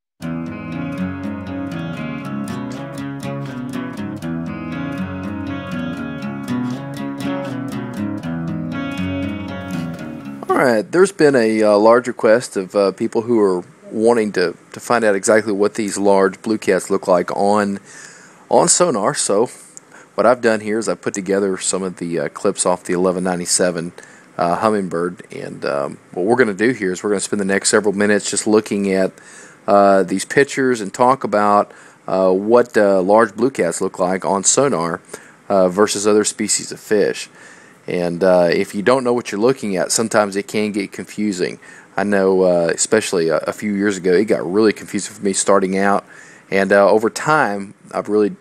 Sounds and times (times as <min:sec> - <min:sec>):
Speech: 0:10.4 - 0:17.9, 0:18.5 - 0:37.3, 0:37.9 - 0:48.4.